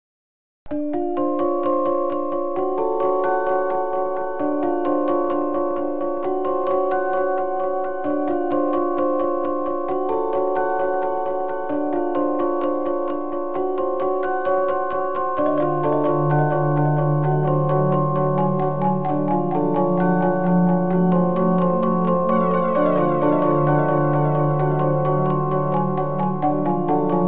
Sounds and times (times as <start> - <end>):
Music: 0.7 - 27.2.